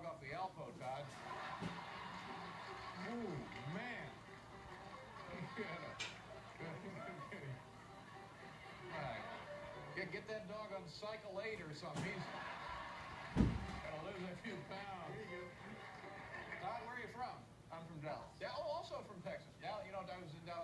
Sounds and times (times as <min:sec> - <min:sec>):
Speech: 0:00.0 - 0:01.2, 0:10.0 - 0:12.3, 0:16.6 - 0:20.6.